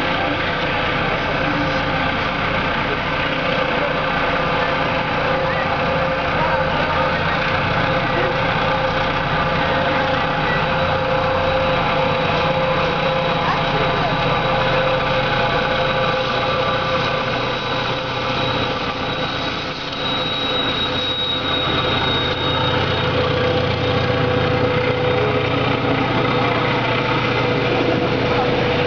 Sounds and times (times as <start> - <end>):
Engine: 0.0 - 28.8
Railroad car, train wagon: 0.0 - 28.8
Train: 0.0 - 28.8.